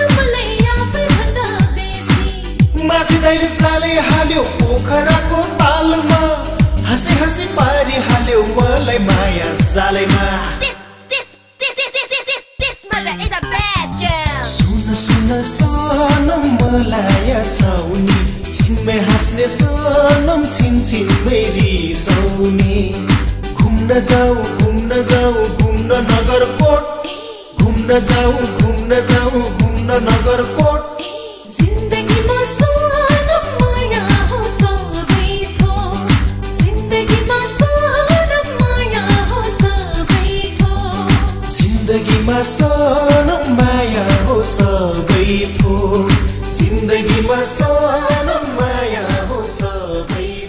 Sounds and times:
Music: 0:00.0 - 0:11.6, 0:12.5 - 0:50.4
Singing: 0:00.0 - 0:12.9, 0:14.5 - 0:50.4.

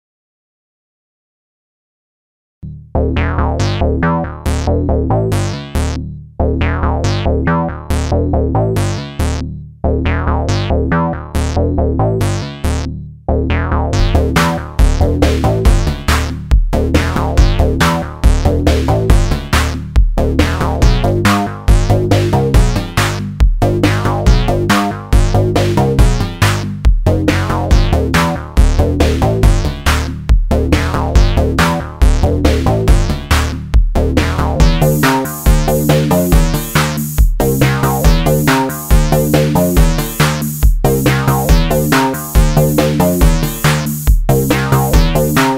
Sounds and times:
Synthesizer: 0:03.0 - 0:45.5
Drum machine: 0:06.8 - 0:09.5, 0:10.3 - 0:11.6, 0:13.8 - 0:45.5.

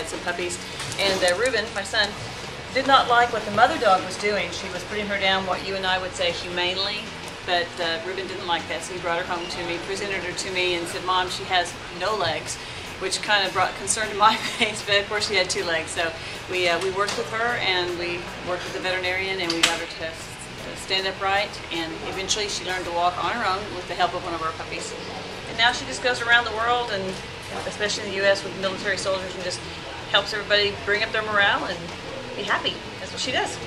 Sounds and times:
Speech: 0:00.0 - 0:33.6.

